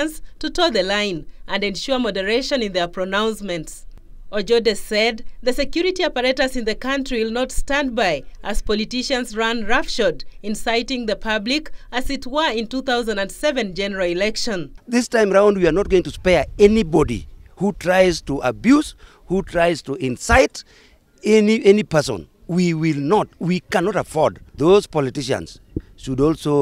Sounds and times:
Narration, monologue: 0:00.0 - 0:26.6
Male speech, man speaking: 0:14.2 - 0:20.6, 0:21.2 - 0:26.6.

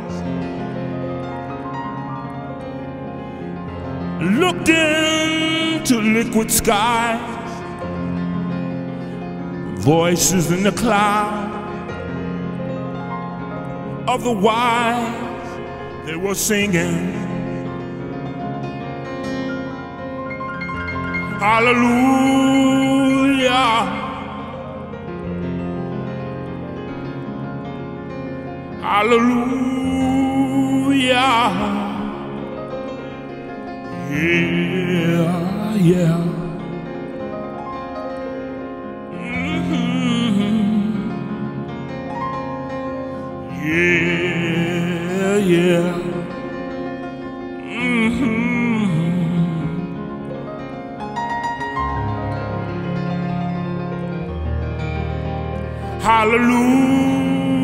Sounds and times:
Music: 0:00.0 - 0:57.6.

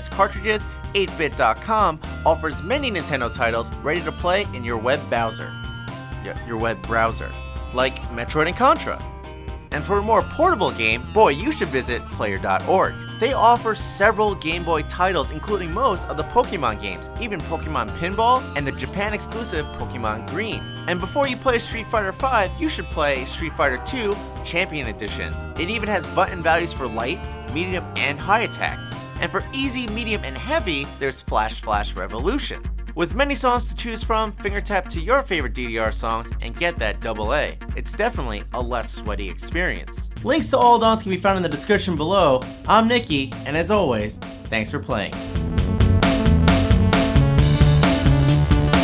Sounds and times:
Speech: 0:00.0 - 0:05.5, 0:06.2 - 0:09.0, 0:09.8 - 0:45.2.

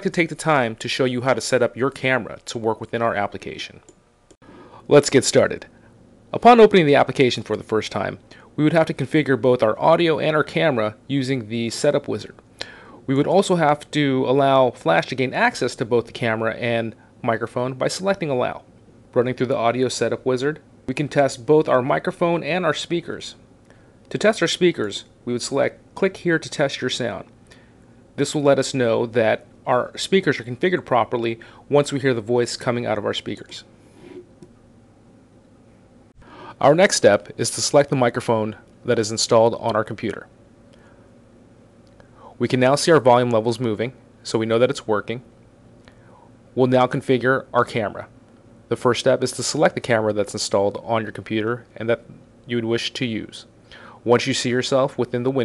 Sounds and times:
Speech: 0:00.0 - 0:03.9, 0:04.8 - 0:12.4, 0:13.0 - 0:23.4, 0:24.1 - 0:27.4, 0:28.2 - 0:33.7, 0:36.5 - 0:40.4, 0:42.2 - 0:45.3, 0:46.6 - 0:55.4.

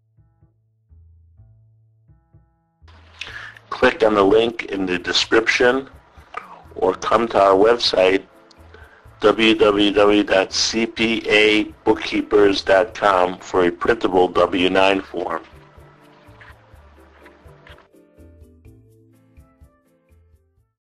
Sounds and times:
Speech: 0:03.7 - 0:08.2, 0:09.2 - 0:15.5.

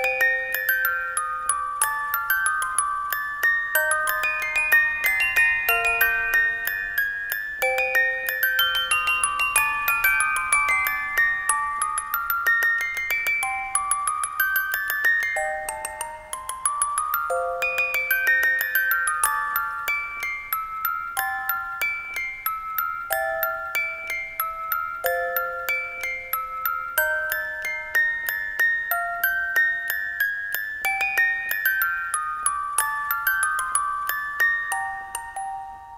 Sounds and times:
Glockenspiel: 0:00.0 - 0:35.9.

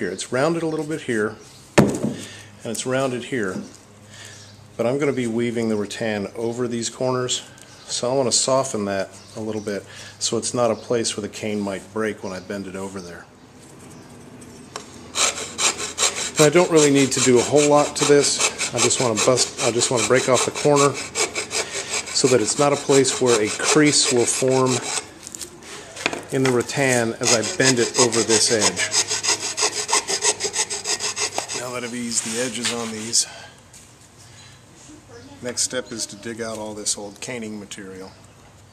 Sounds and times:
Filing (rasp): 0:15.1 - 0:25.1, 0:27.0 - 0:33.1
Rub: 0:15.2 - 0:25.1, 0:27.2 - 0:33.2.

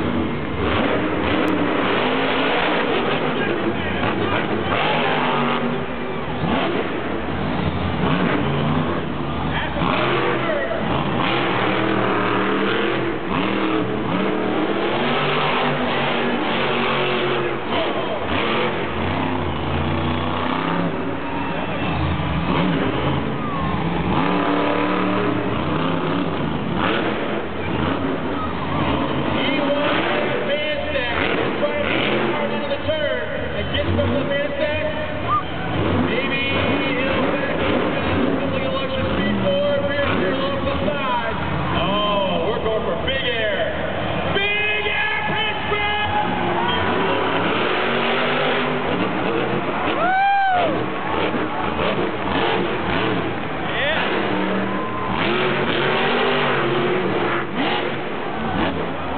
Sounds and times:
Vehicle: 0:00.0 - 0:59.1
Speech: 0:09.5 - 0:10.8, 0:29.3 - 0:35.3, 0:36.0 - 0:46.4, 0:53.7 - 0:54.2.

